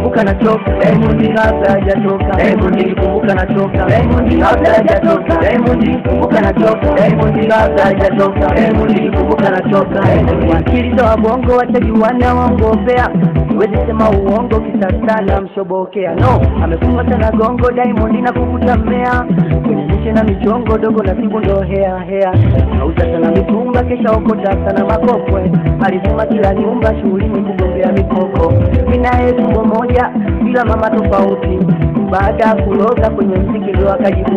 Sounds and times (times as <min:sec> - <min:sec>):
Folk music: 0:00.0 - 0:15.5, 0:16.2 - 0:34.3.